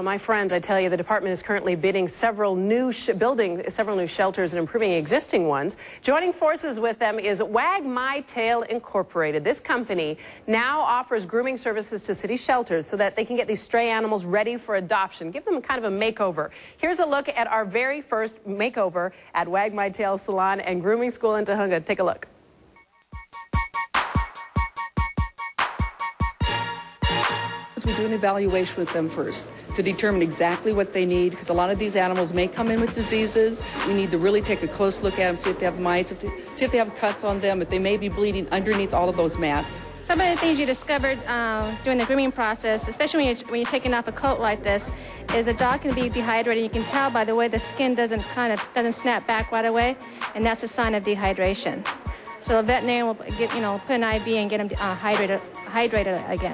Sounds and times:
Speech: 0.0 - 22.3, 27.8 - 56.5
Music: 22.8 - 56.5.

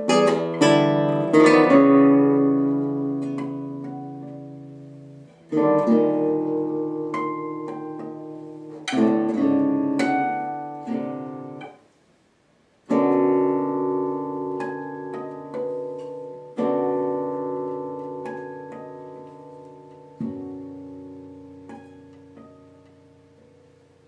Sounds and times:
Strum: 0.0 - 24.0.

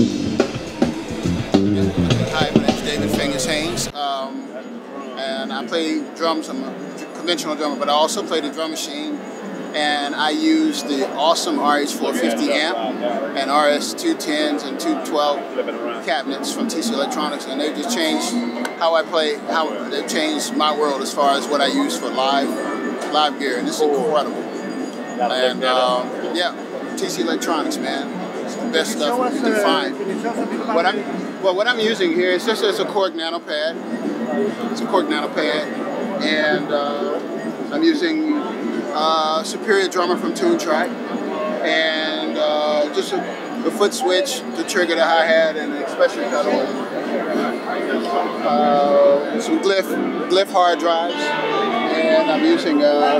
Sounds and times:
Speech: 1.5 - 24.4, 25.2 - 53.1.

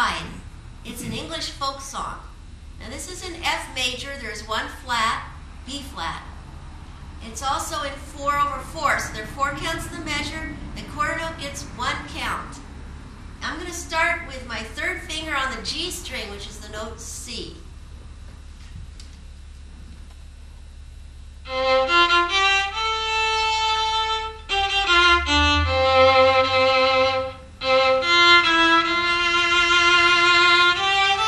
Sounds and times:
Violin, fiddle: 21.5 - 31.2.

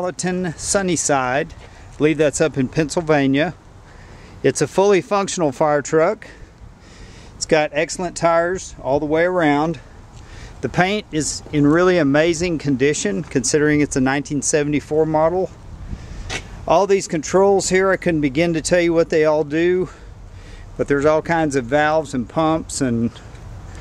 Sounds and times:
Speech: 0.0 - 3.6, 4.4 - 6.4, 7.4 - 9.9, 10.6 - 15.6, 16.7 - 20.0, 20.8 - 23.2.

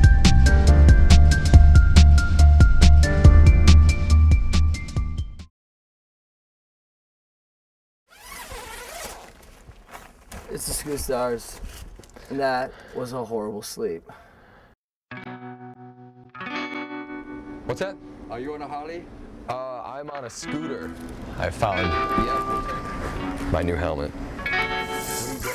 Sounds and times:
Music: 0.0 - 5.5, 15.1 - 18.4, 20.4 - 25.5
Speech: 10.5 - 11.6, 12.3 - 14.1, 17.7 - 22.8, 23.5 - 24.1
Distortion: 19.9 - 25.5.

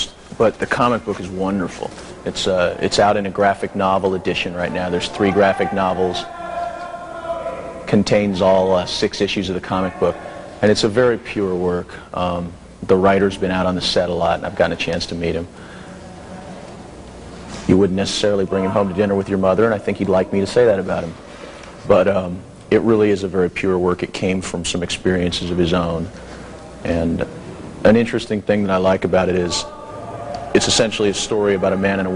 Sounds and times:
Speech: 0.0 - 16.7, 17.6 - 21.2, 21.8 - 32.1.

